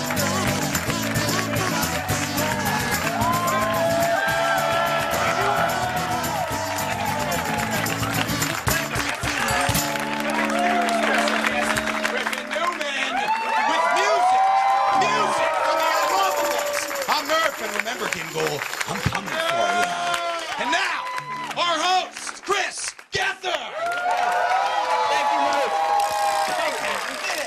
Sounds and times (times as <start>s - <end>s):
Music: 0.0s - 19.6s, 20.6s - 22.5s
Speech: 15.0s - 20.0s, 21.6s - 23.8s.